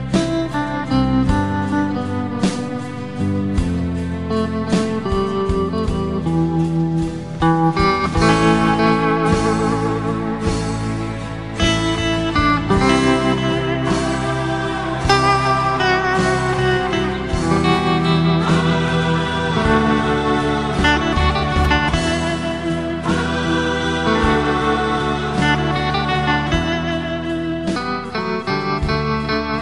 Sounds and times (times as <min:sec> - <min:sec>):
Guitar: 0:00.0 - 0:29.6.